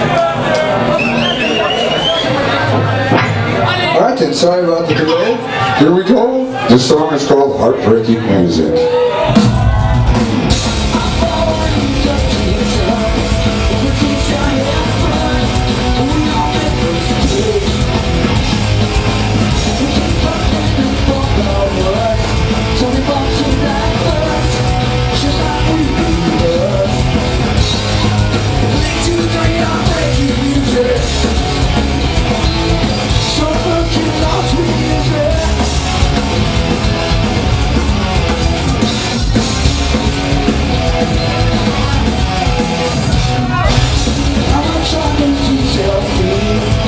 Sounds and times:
Exciting music: 0:09.3 - 0:46.8.

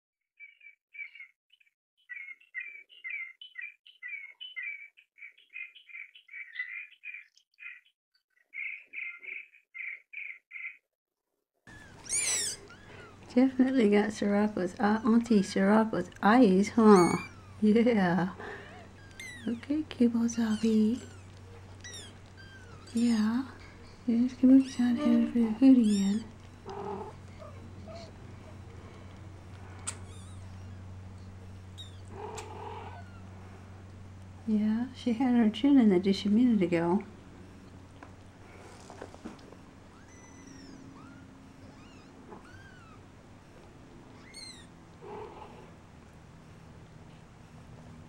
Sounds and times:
Chirp, tweet: 0:00.4 - 0:10.8.

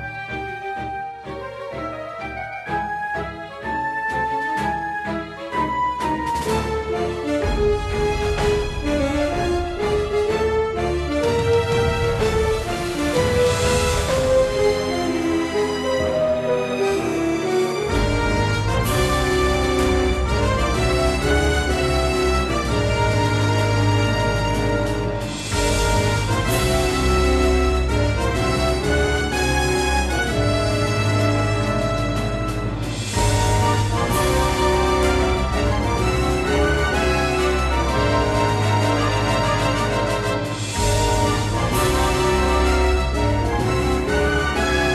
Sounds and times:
Background music: 0:00.0 - 0:44.9
Theme music: 0:00.0 - 0:44.9.

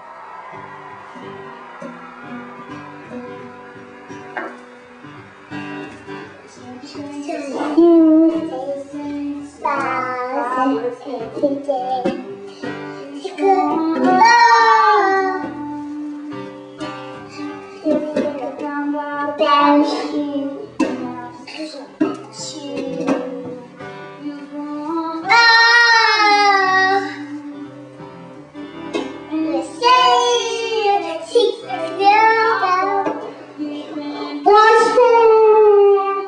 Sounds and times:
Music: 0:00.0 - 0:36.2
Child singing: 0:06.6 - 0:16.5, 0:17.4 - 0:27.8, 0:29.3 - 0:33.3, 0:34.4 - 0:36.2.

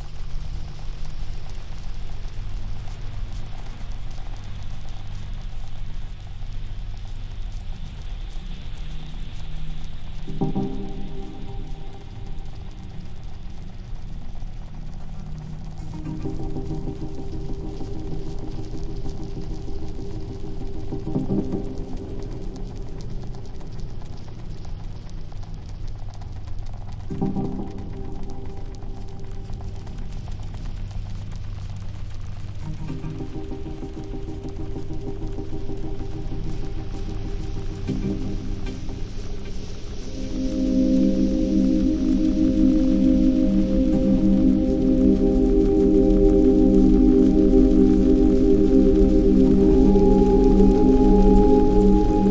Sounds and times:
Trickle, dribble: 0:00.0 - 0:44.0
Music: 0:00.0 - 0:52.3.

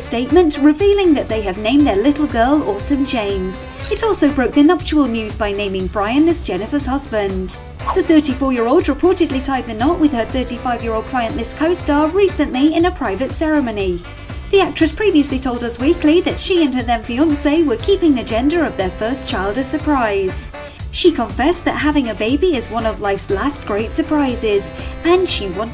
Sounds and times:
Music: 0:00.0 - 0:25.7
Speech: 0:00.0 - 0:25.7.

